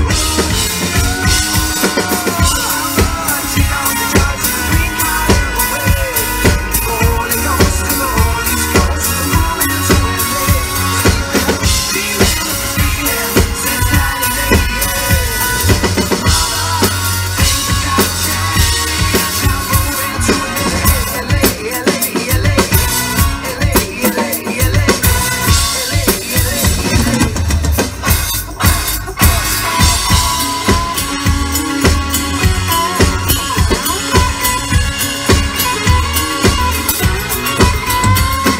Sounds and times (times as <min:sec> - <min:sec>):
Drum: 0:00.0 - 0:38.5
Inside, large room or hall: 0:00.0 - 0:38.5.